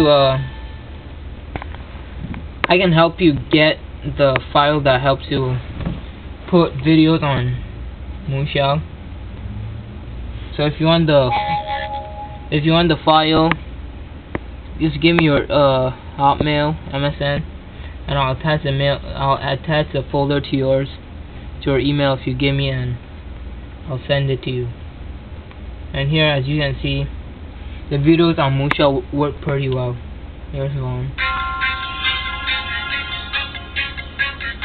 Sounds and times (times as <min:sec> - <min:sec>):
Speech: 0:00.0 - 0:00.5, 0:02.7 - 0:05.6, 0:06.5 - 0:07.6, 0:08.2 - 0:08.9, 0:10.6 - 0:11.9, 0:12.6 - 0:13.6, 0:14.8 - 0:17.5, 0:18.1 - 0:21.0, 0:21.6 - 0:23.0, 0:23.9 - 0:24.8, 0:25.9 - 0:27.1, 0:27.9 - 0:31.2
Music: 0:11.3 - 0:12.6, 0:31.2 - 0:34.6.